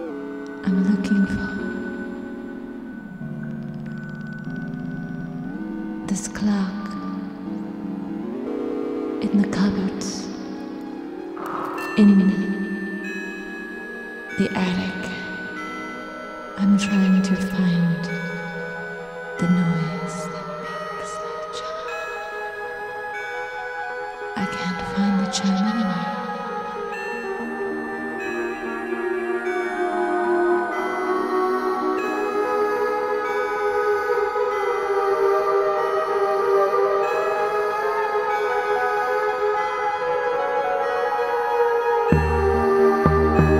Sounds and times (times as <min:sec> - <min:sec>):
Music: 0:00.0 - 0:43.6
Speech: 0:00.6 - 0:01.7, 0:06.1 - 0:07.2, 0:09.2 - 0:10.4, 0:11.8 - 0:12.6, 0:14.4 - 0:15.3, 0:16.6 - 0:18.2, 0:19.4 - 0:21.8, 0:24.4 - 0:26.3.